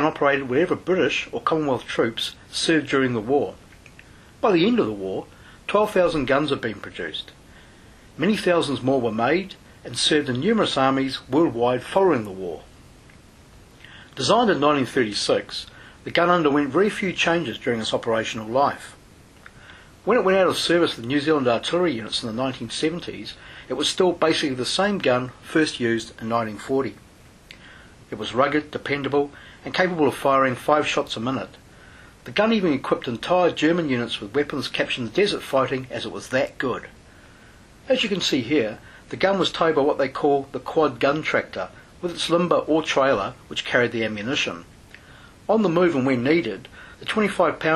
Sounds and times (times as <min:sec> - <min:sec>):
Speech: 0:00.0 - 0:03.6, 0:04.4 - 0:07.4, 0:08.2 - 0:12.7, 0:14.1 - 0:19.0, 0:20.0 - 0:27.0, 0:28.1 - 0:31.6, 0:32.2 - 0:37.0, 0:37.8 - 0:44.7, 0:45.5 - 0:47.7.